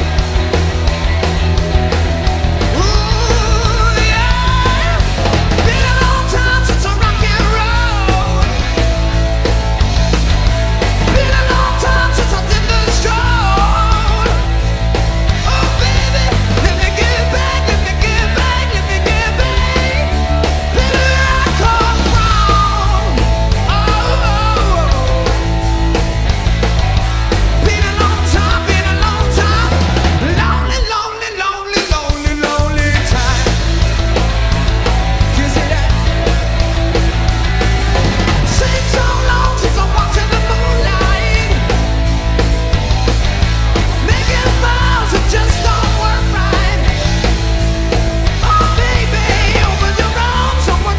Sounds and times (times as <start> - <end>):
Rock and roll: 0.0 - 50.9.